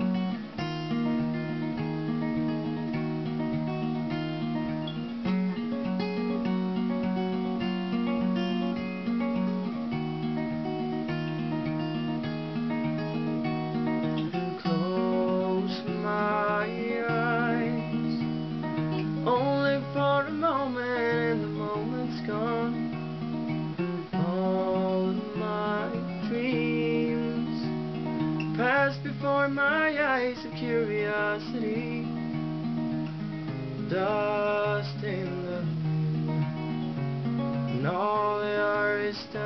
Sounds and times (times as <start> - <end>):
Music: 0.0 - 39.4.